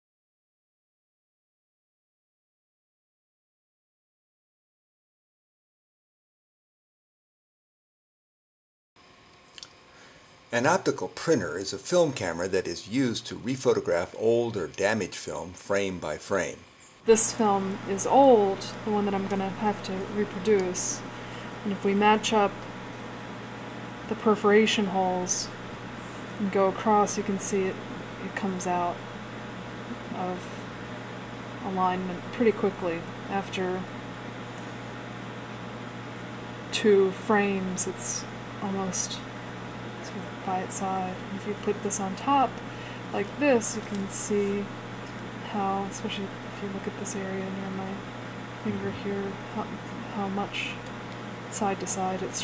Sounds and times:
Speech: 10.5 - 21.0, 21.6 - 22.6, 24.1 - 25.5, 26.4 - 29.0, 30.1 - 30.4, 31.6 - 33.9, 36.8 - 39.2, 40.1 - 42.6, 43.2 - 44.7, 45.5 - 48.0, 48.7 - 50.8, 51.5 - 52.4.

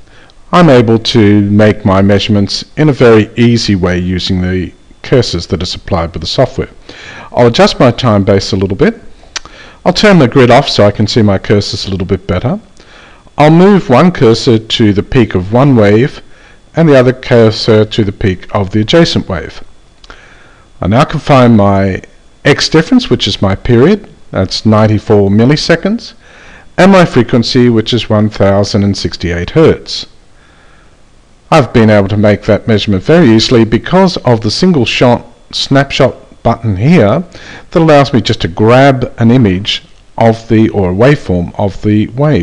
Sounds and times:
Speech: 0.5 - 9.1, 9.8 - 12.8, 13.4 - 19.7, 20.8 - 26.2, 26.8 - 30.2, 31.5 - 42.4.

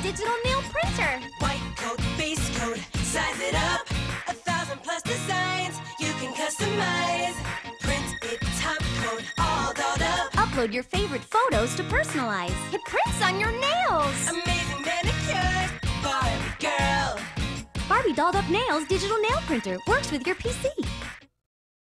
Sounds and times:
Speech: 0.0 - 1.2, 10.4 - 14.2, 17.9 - 20.9
Music: 0.0 - 21.4.

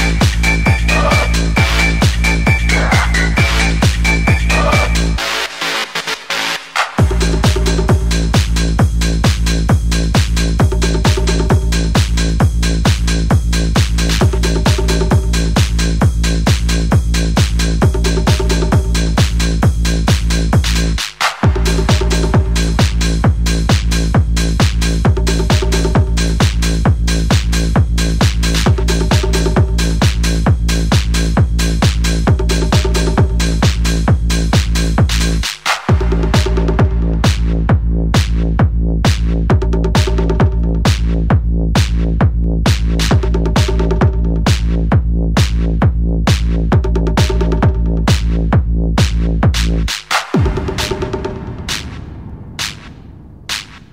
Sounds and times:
Trance music: 0.0 - 41.3, 47.1 - 53.9
Techno: 0.0 - 53.9.

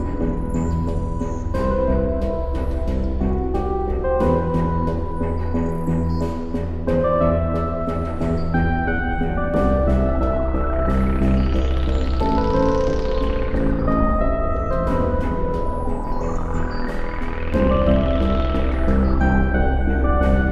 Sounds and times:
Soundtrack music: 0.0 - 20.5.

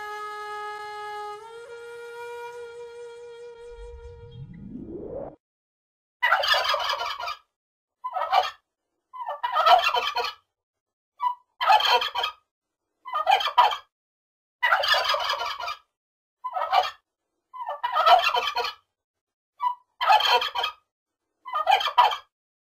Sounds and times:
Gobble: 6.2 - 8.6, 9.2 - 10.4, 11.2 - 12.4, 13.1 - 13.9, 14.6 - 15.9, 16.5 - 17.0, 17.6 - 18.8, 19.6 - 20.8, 21.5 - 22.3.

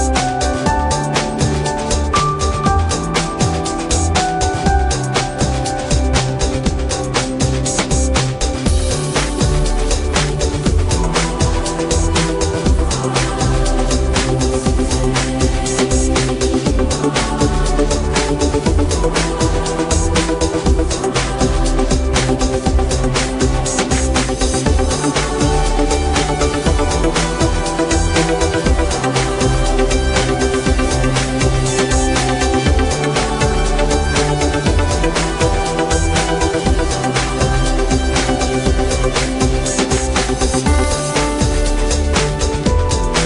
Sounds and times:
Music: 0.0 - 43.2.

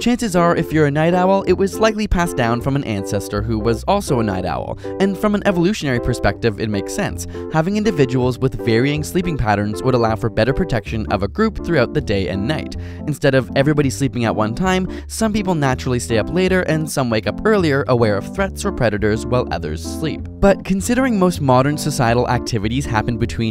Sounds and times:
Music: 0.0 - 23.5
Speech: 0.0 - 23.5.

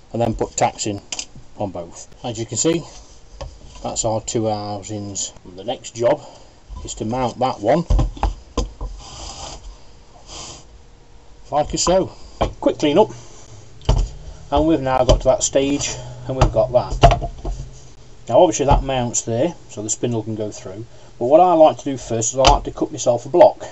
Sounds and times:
Speech: 0.1 - 1.0, 1.6 - 3.0, 3.8 - 7.9, 11.5 - 13.2, 14.5 - 17.1, 18.3 - 23.7.

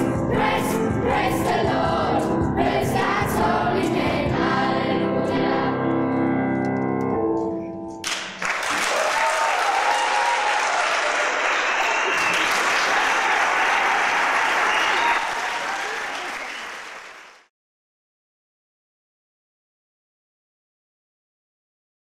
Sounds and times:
Applause: 8.0 - 17.5.

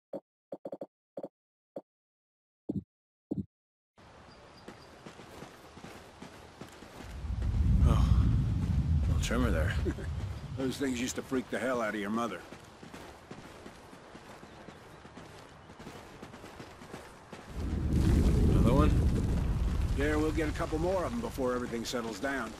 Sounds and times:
Outside, rural or natural: 4.0 - 22.5
Speech: 9.1 - 10.0, 10.6 - 12.5, 18.5 - 19.0, 20.0 - 22.5.

